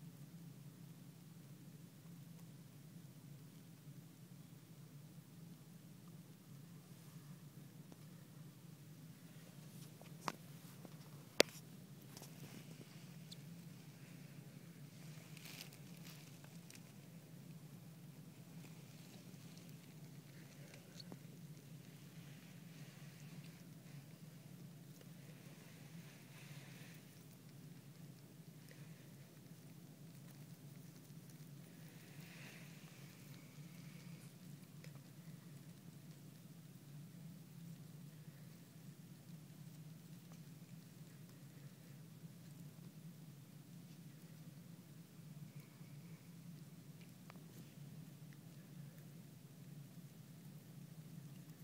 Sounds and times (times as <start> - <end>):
Patter: 0.0 - 51.6.